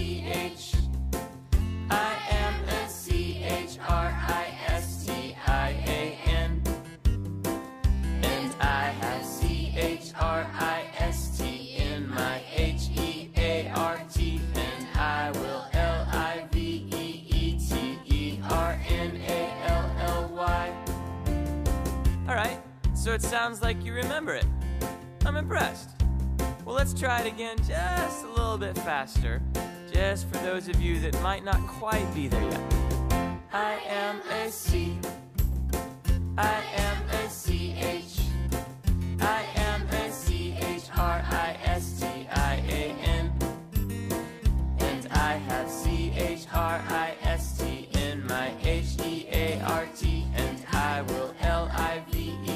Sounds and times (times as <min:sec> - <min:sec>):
Christmas music: 0:00.0 - 0:52.5.